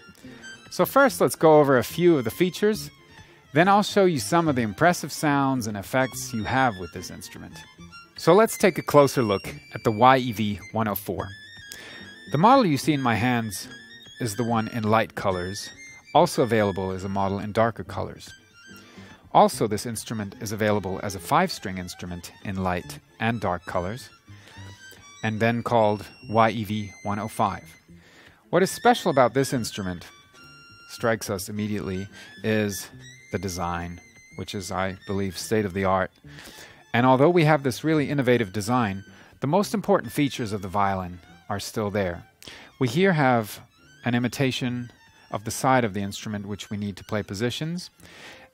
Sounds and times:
Violin, fiddle: 0.0 - 48.5
Speech: 0.7 - 2.9, 3.6 - 7.6, 8.2 - 11.3, 12.3 - 18.3, 19.3 - 24.1, 25.2 - 27.7, 28.5 - 30.1, 30.9 - 36.1, 36.9 - 48.0.

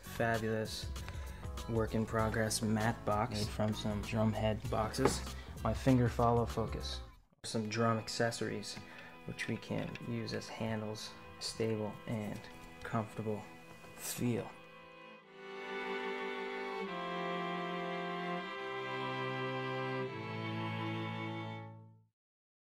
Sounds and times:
Speech: 0.0 - 0.9, 1.6 - 14.6
Music: 0.0 - 22.1.

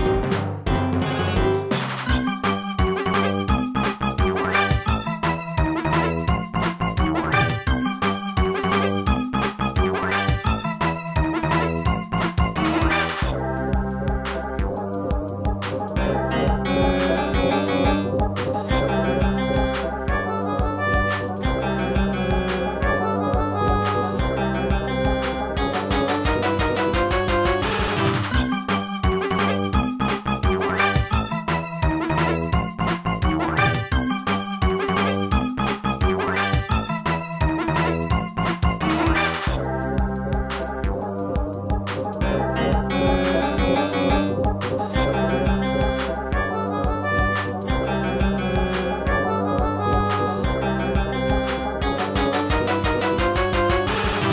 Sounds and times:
Music: 0.0 - 54.3.

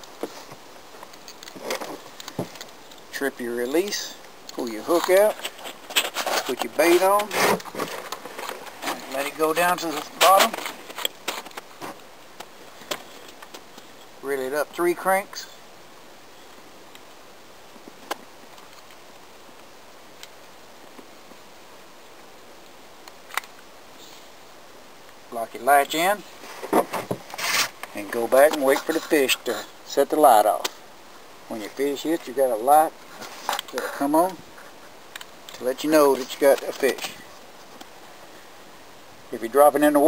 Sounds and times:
Stream: 0.0 - 40.0.

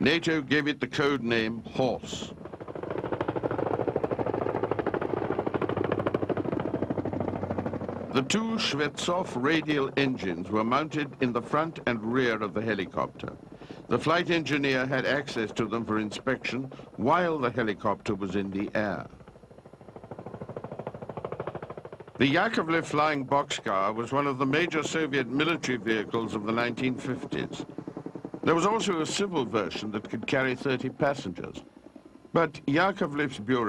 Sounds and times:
Speech: 0.0 - 2.4, 8.2 - 19.2, 22.2 - 27.7, 28.5 - 31.6, 32.4 - 33.6.

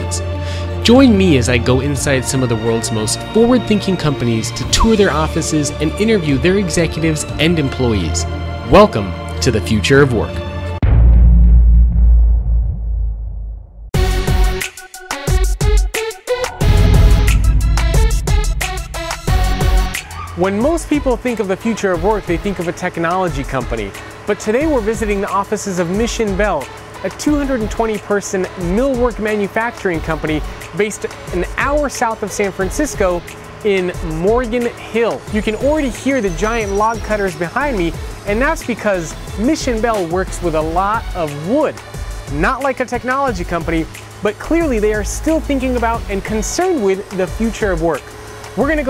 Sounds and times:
Speech: 0.0 - 10.4, 20.4 - 48.9
Music: 0.0 - 48.9.

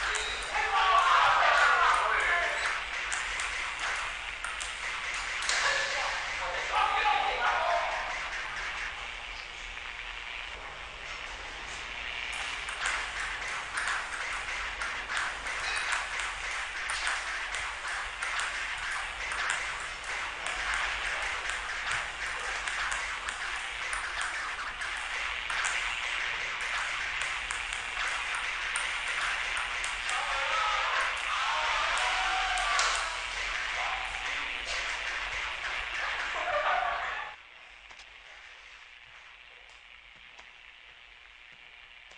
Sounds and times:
Speech: 0.0 - 2.8, 5.5 - 8.2, 30.1 - 34.8, 36.0 - 37.4.

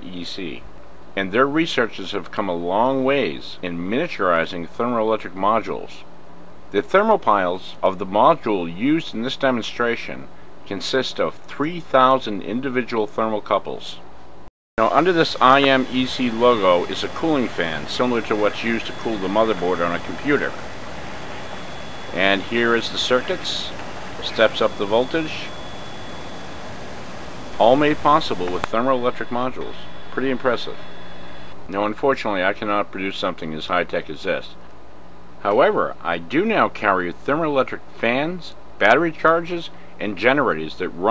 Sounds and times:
Speech: 0.0 - 0.6, 1.2 - 6.1, 6.7 - 14.0, 14.8 - 20.6, 22.2 - 25.5, 27.6 - 30.8, 31.7 - 34.6, 35.4 - 41.1.

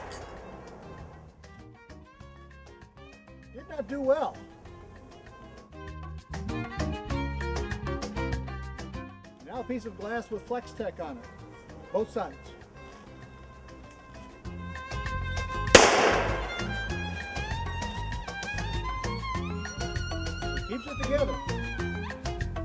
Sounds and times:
Music: 0.0 - 22.6
Speech: 3.6 - 4.4, 9.4 - 11.2, 11.8 - 12.5, 20.7 - 21.4.

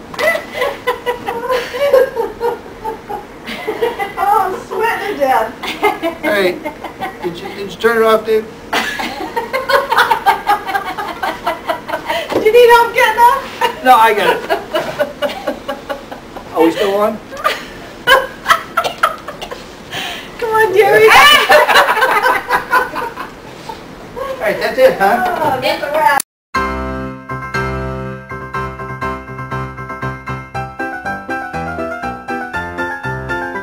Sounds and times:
Music: 26.6 - 33.6.

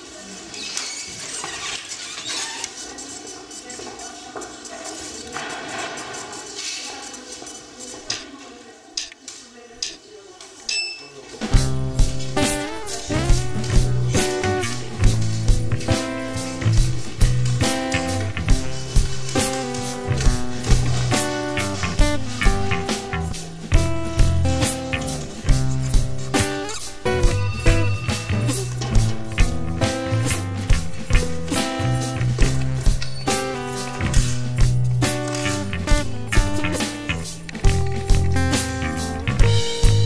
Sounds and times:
Music: 11.4 - 40.0.

